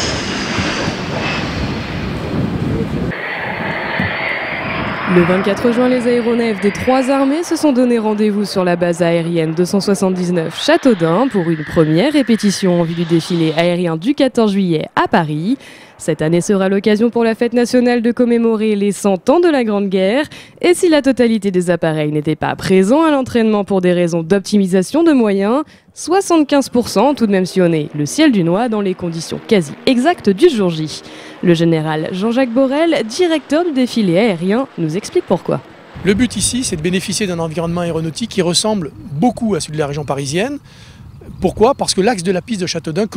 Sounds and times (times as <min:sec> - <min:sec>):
Speech: 0:05.1 - 0:40.6, 0:41.2 - 0:43.1.